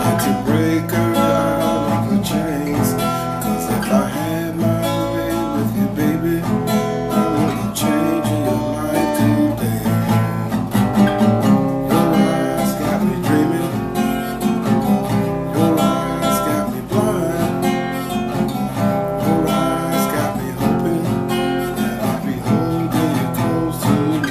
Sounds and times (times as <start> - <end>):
Acoustic guitar: 0.0 - 24.3.